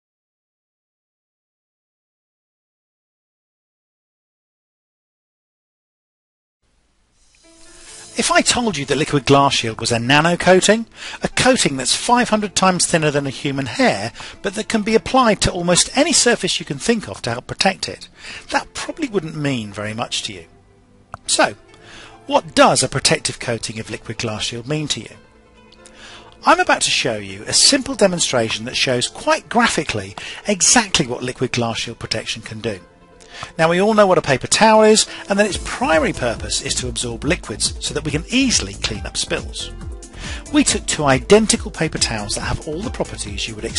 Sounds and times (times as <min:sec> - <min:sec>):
Music: 0:07.1 - 0:43.7
Speech: 0:08.2 - 0:20.5, 0:21.2 - 0:21.6, 0:22.3 - 0:25.2, 0:26.4 - 0:32.8, 0:33.5 - 0:39.7, 0:40.5 - 0:43.7.